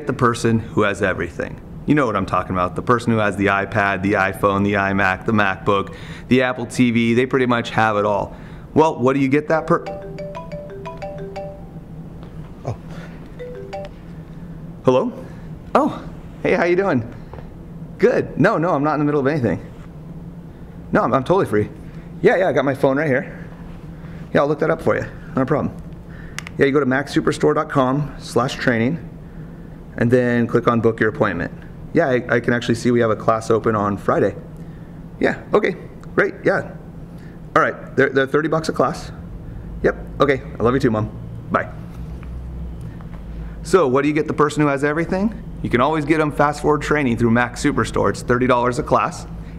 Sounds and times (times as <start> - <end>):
Speech: 0.0 - 9.9, 14.8 - 17.1, 18.0 - 19.7, 20.9 - 23.5, 24.3 - 25.8, 26.6 - 29.1, 30.0 - 34.5, 35.2 - 36.8, 37.6 - 39.2, 39.8 - 41.8, 43.6 - 49.3.